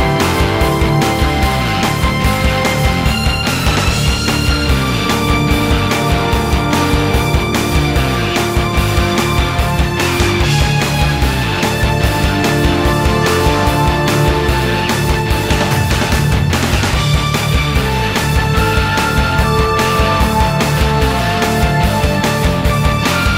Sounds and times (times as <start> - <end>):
Angry music: 0.0 - 23.3.